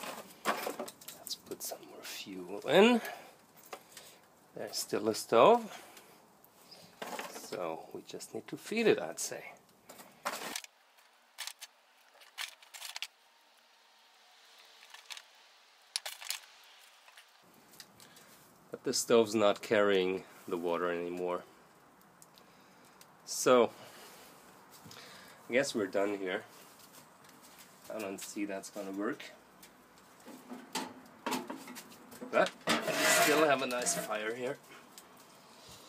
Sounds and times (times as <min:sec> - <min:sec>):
Speech: 0:01.2 - 0:03.2, 0:04.6 - 0:05.7, 0:07.4 - 0:09.6, 0:18.7 - 0:21.5, 0:23.3 - 0:23.8, 0:25.5 - 0:26.5, 0:27.9 - 0:29.4, 0:32.3 - 0:34.6.